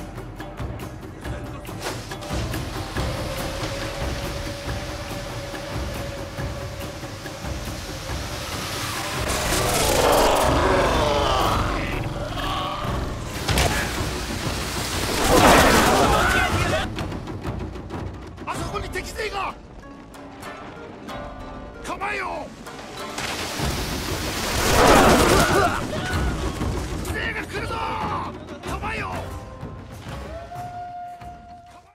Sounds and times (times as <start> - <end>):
Music: 0.0 - 31.9
Speech: 18.4 - 19.6, 21.8 - 22.5, 27.1 - 29.4.